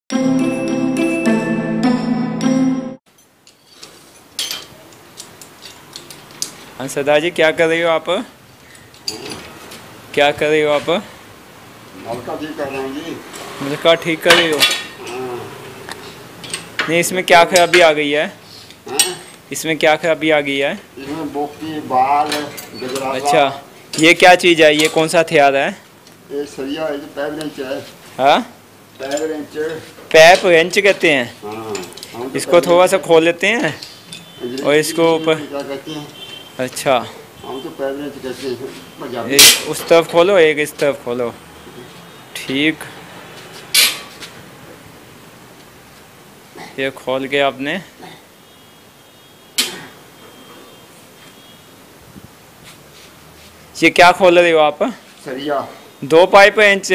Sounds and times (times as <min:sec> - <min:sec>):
Music: 0:00.1 - 0:03.0.